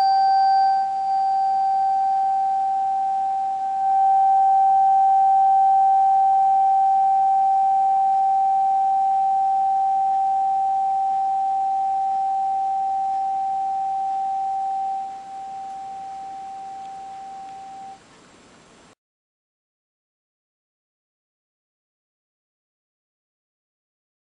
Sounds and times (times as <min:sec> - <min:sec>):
Tuning fork: 0:00.0 - 0:18.0.